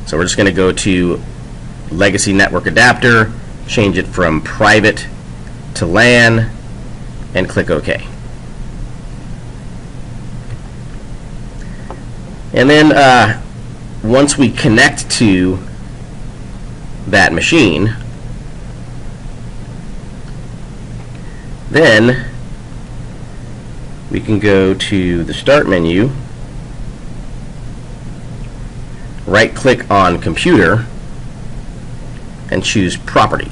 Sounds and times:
Speech: 0:00.0 - 0:01.3, 0:01.9 - 0:05.2, 0:05.8 - 0:06.6, 0:07.3 - 0:08.2, 0:12.5 - 0:15.7, 0:17.1 - 0:18.0, 0:21.7 - 0:22.4, 0:24.1 - 0:26.3, 0:29.2 - 0:30.9, 0:32.5 - 0:33.5
White noise: 0:00.0 - 0:33.5.

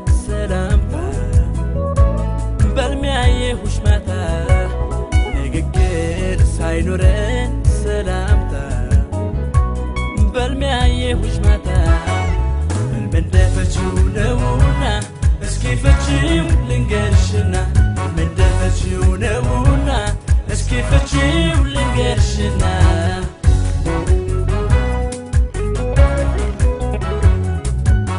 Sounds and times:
Background music: 0:00.0 - 0:28.1
Soundtrack music: 0:00.0 - 0:28.1.

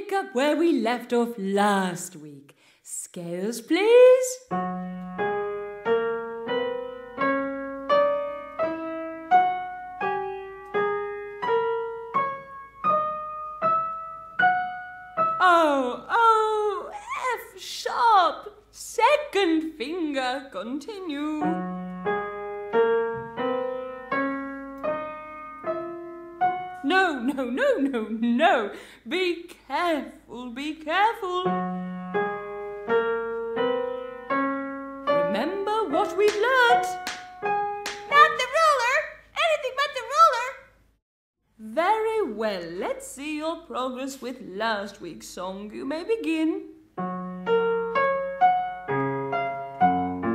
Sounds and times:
Speech: 0:00.0 - 0:04.5, 0:15.4 - 0:21.6, 0:26.8 - 0:31.6, 0:35.2 - 0:37.0, 0:38.1 - 0:40.7, 0:41.6 - 0:46.7
Music: 0:04.5 - 0:15.4, 0:21.4 - 0:26.9, 0:31.3 - 0:38.1, 0:47.0 - 0:50.3.

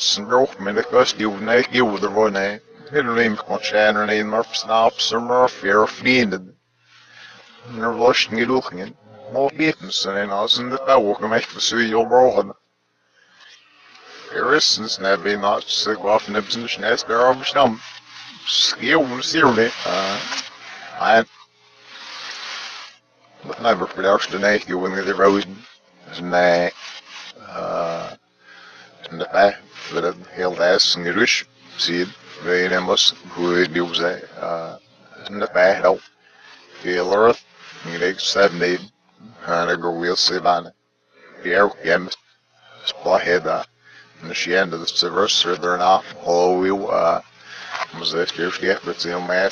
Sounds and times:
Speech: 0:00.0 - 0:06.6, 0:07.2 - 0:12.6, 0:14.0 - 0:21.4, 0:23.4 - 0:28.2, 0:28.8 - 0:36.1, 0:36.7 - 0:42.2, 0:42.8 - 0:49.5.

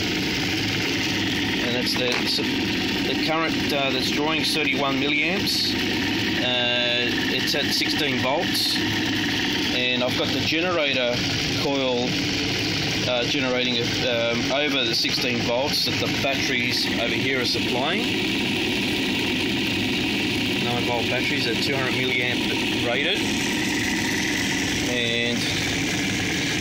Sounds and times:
Speech: 0:01.6 - 0:02.5, 0:03.1 - 0:05.8, 0:06.4 - 0:08.8, 0:09.7 - 0:12.2, 0:13.1 - 0:18.1, 0:20.6 - 0:23.3, 0:24.9 - 0:25.6.

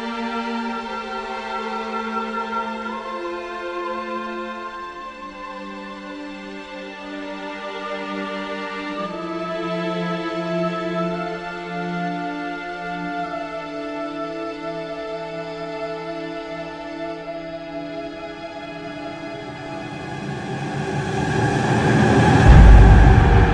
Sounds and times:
Music: 0:00.0 - 0:23.5.

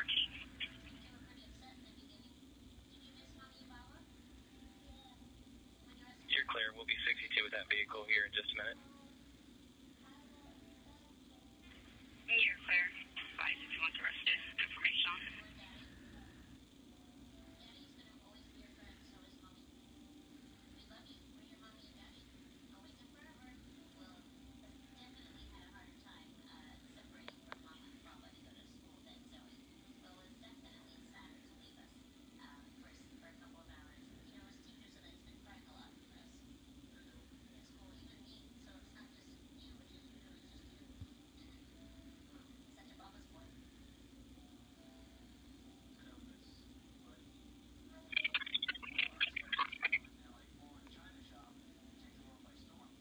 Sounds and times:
Radio: 0:00.0 - 0:02.1, 0:06.0 - 0:08.8, 0:12.3 - 0:16.4, 0:48.0 - 0:53.0
Speech: 0:00.0 - 0:04.2, 0:05.9 - 0:08.9, 0:12.3 - 0:16.1, 0:17.6 - 0:19.8, 0:20.8 - 0:43.7, 0:47.9 - 0:53.0.

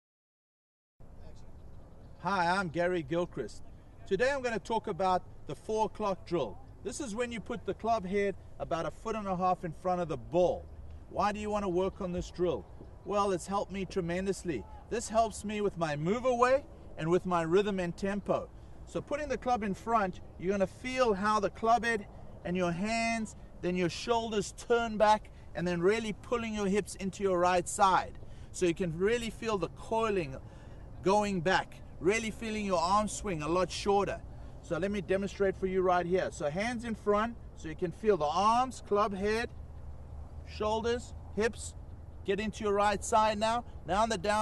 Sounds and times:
Speech: 0:02.2 - 0:30.4, 0:31.0 - 0:39.5, 0:40.5 - 0:44.4.

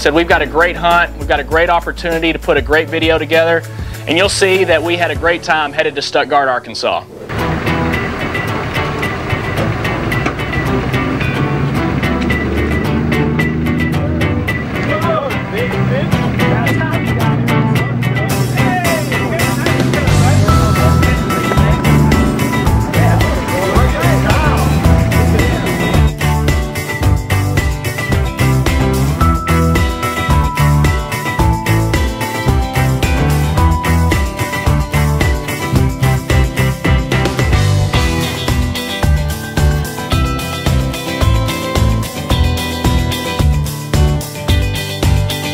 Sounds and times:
Speech: 0:00.0 - 0:07.1, 0:14.9 - 0:17.4, 0:18.2 - 0:21.2
Music: 0:00.0 - 0:45.5.

